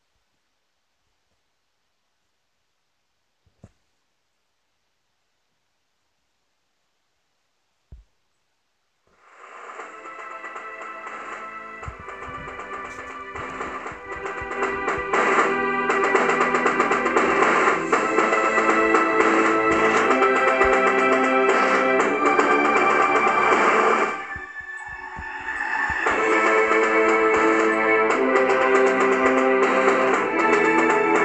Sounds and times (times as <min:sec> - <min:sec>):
Silence: 0:00.0 - 0:27.8
Music: 0:09.2 - 0:31.2.